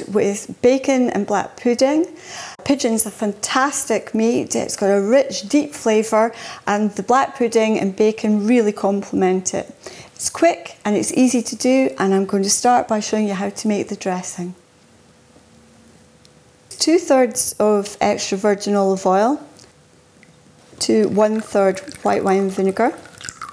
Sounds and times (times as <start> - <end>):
Speech: 0.0 - 14.6, 16.7 - 19.5, 20.8 - 23.0.